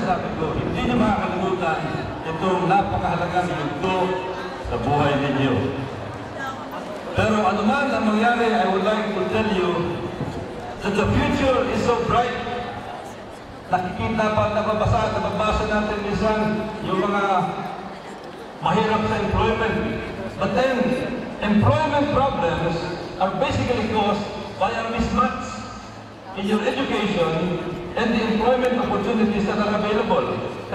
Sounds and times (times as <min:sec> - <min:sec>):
Male speech, man speaking: 0:00.0 - 0:05.8, 0:07.1 - 0:10.1, 0:10.8 - 0:12.8, 0:13.7 - 0:17.7, 0:18.6 - 0:25.8, 0:26.4 - 0:30.7
Narration, monologue: 0:00.0 - 0:17.9, 0:18.5 - 0:30.7.